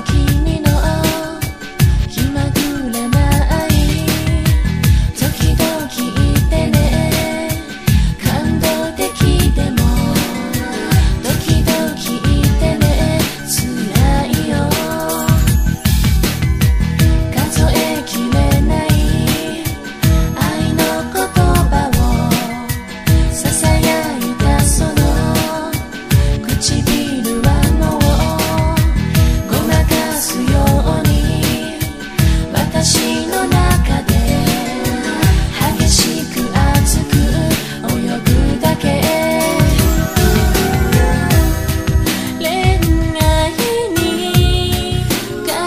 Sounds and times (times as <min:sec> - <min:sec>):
Music of Asia: 0:00.0 - 0:45.6.